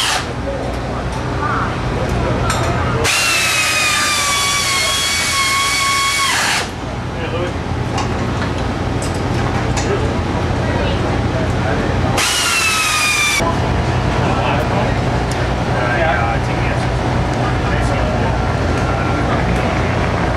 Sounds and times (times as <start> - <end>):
Speech: 9.8 - 12.2, 13.4 - 20.0.